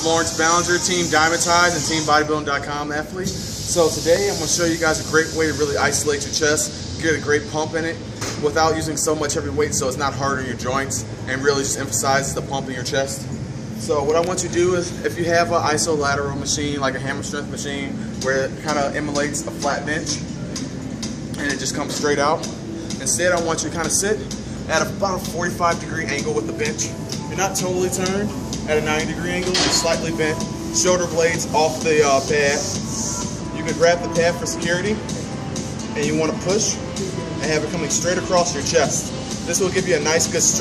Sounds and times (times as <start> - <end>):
Speech: 0.0 - 13.2, 13.8 - 20.2, 21.4 - 32.8, 33.6 - 35.0, 36.0 - 36.8, 37.4 - 40.6
Music: 0.0 - 40.6.